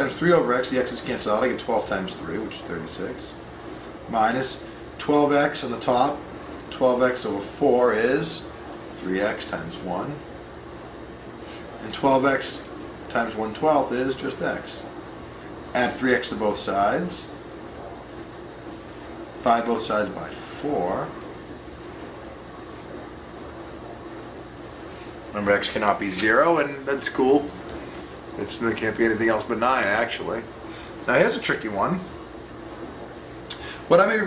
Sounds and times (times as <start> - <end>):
Speech: 0.0 - 3.4, 4.1 - 10.3, 11.8 - 14.9, 15.7 - 17.4, 19.4 - 21.3, 25.3 - 27.6, 28.4 - 30.5, 31.1 - 32.2, 33.5 - 34.2.